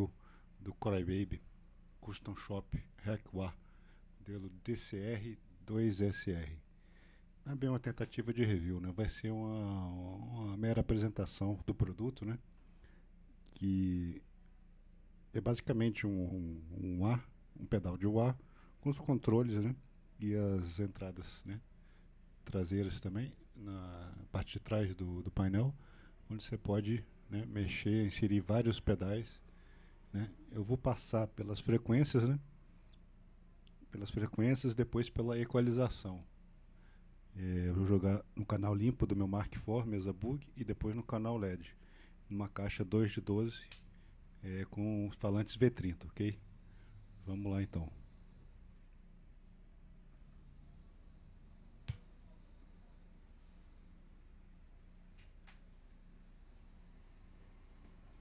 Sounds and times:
Speech: 0.0 - 3.6, 4.2 - 6.7, 7.4 - 12.5, 13.4 - 14.3, 15.3 - 21.7, 22.4 - 29.4, 30.1 - 32.5, 33.8 - 36.3, 37.3 - 43.8, 44.4 - 46.5, 47.2 - 48.1.

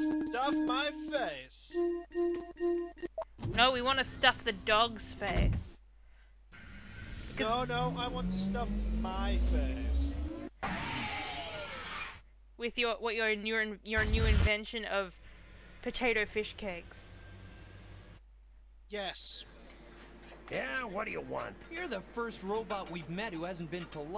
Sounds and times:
Speech: 0.0 - 1.8, 3.6 - 5.6, 7.4 - 10.2, 12.6 - 15.1, 18.9 - 19.5, 20.5 - 24.1.

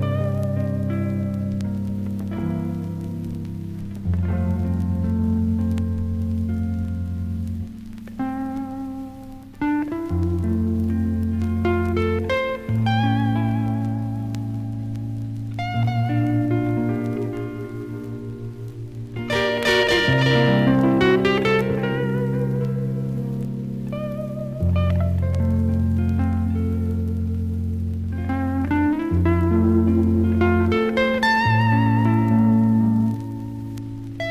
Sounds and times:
Plucked string instrument: 0.0 - 34.3.

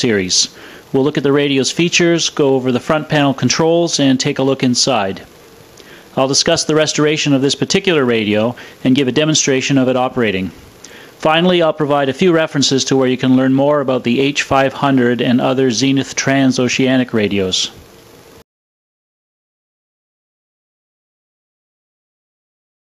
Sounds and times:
Speech: 0.0 - 5.3, 6.1 - 10.6, 11.2 - 17.8.

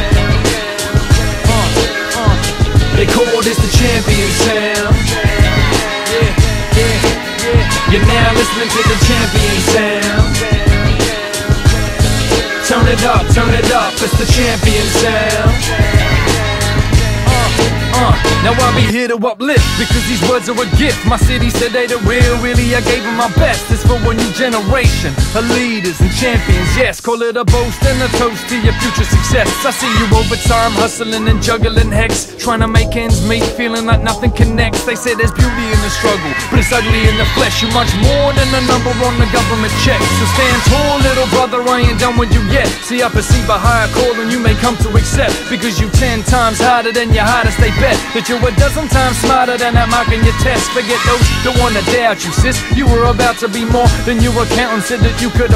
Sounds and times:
Music: 0.0 - 55.5.

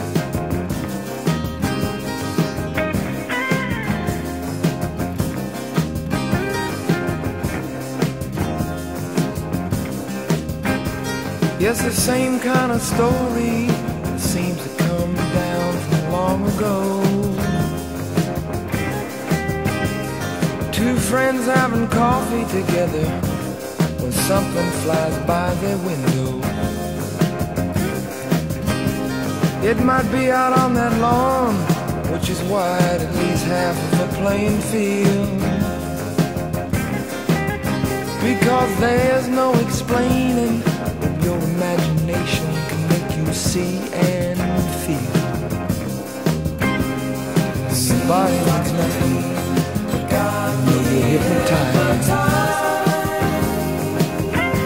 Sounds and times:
Psychedelic rock: 0.0 - 54.6.

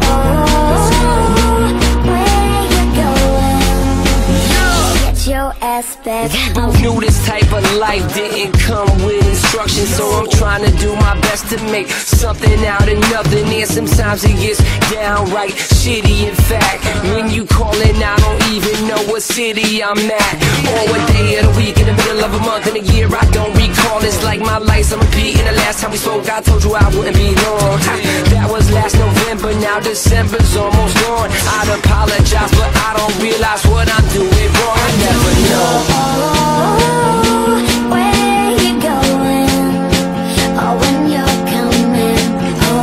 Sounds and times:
Rhythm and blues: 0.0 - 42.8.

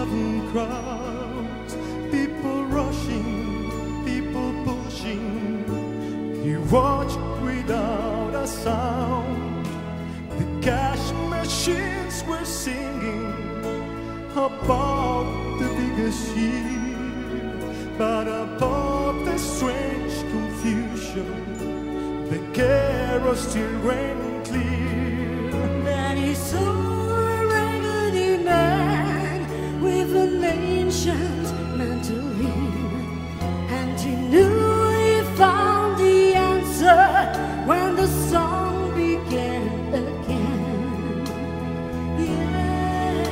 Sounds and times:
Christmas music: 0.0 - 43.3.

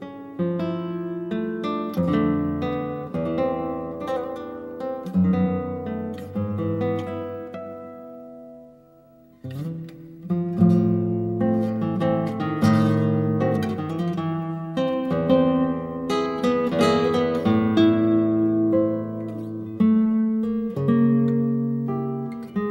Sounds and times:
Acoustic guitar: 0.0 - 22.7
Strum: 0.0 - 22.7.

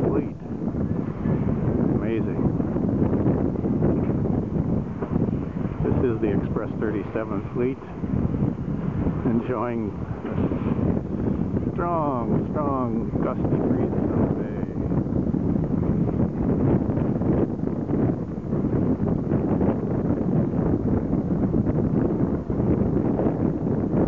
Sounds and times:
Speech: 0.0 - 0.4, 2.0 - 2.4, 5.8 - 7.9, 9.2 - 10.0, 11.8 - 14.8
Boat, Water vehicle: 0.0 - 24.0.

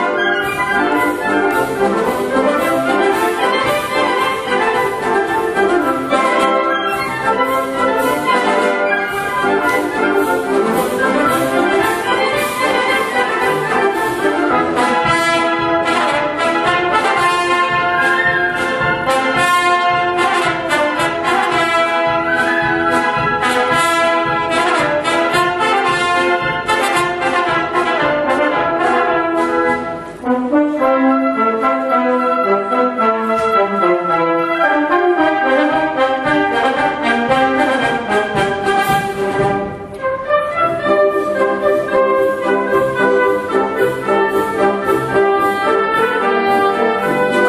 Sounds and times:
Classical music: 0.0 - 47.4
Orchestra: 0.0 - 47.4.

